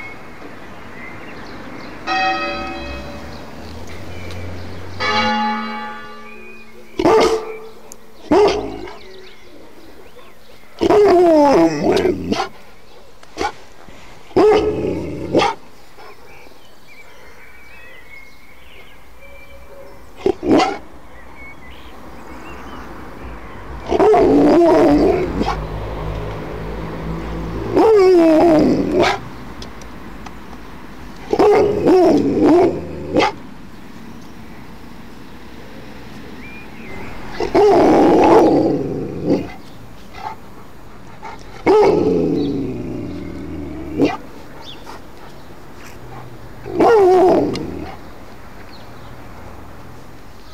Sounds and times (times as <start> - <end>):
Growling: 14.5 - 15.6, 23.9 - 25.6, 27.7 - 29.2, 31.3 - 33.3, 37.3 - 39.7, 41.3 - 44.2, 46.1 - 48.0.